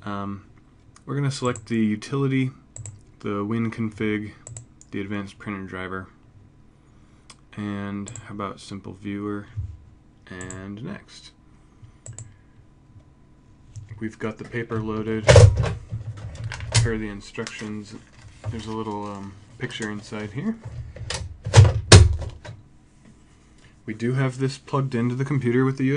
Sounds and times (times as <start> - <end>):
Speech: 0.0 - 2.6, 3.2 - 6.2, 7.5 - 9.6, 10.2 - 11.4, 14.0 - 15.6, 16.7 - 20.7, 23.9 - 25.9.